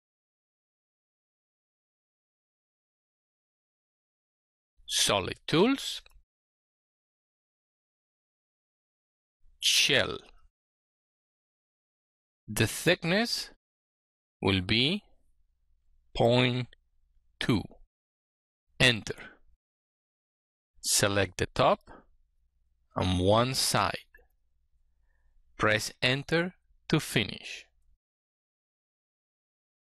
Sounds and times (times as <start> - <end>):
Speech: 4.9 - 6.2, 9.6 - 10.4, 12.5 - 13.6, 14.4 - 15.1, 16.2 - 16.8, 17.4 - 17.9, 18.8 - 19.4, 20.8 - 22.0, 23.0 - 24.2, 25.6 - 27.8.